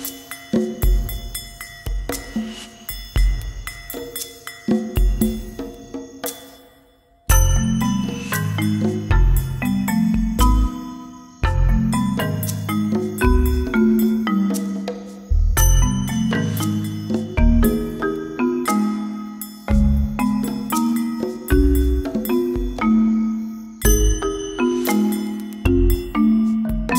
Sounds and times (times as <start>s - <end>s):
Music: 0.0s - 26.9s.